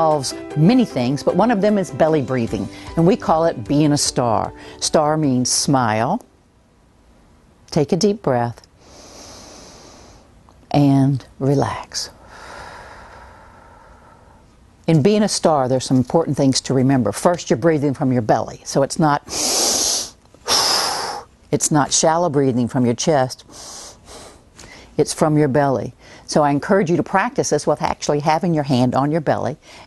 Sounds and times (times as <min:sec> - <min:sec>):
Speech: 0:07.7 - 0:08.7, 0:10.7 - 0:12.1, 0:14.9 - 0:19.2, 0:21.6 - 0:23.4, 0:25.0 - 0:29.6
Gasp: 0:23.5 - 0:25.0, 0:26.0 - 0:26.3, 0:29.6 - 0:29.8.